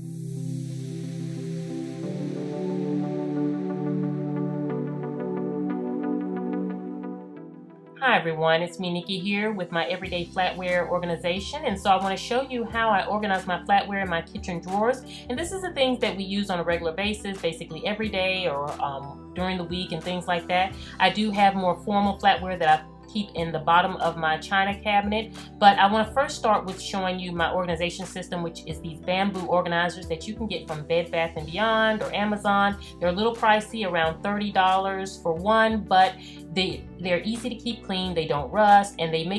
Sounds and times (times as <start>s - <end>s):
Speech: 8.0s - 39.3s.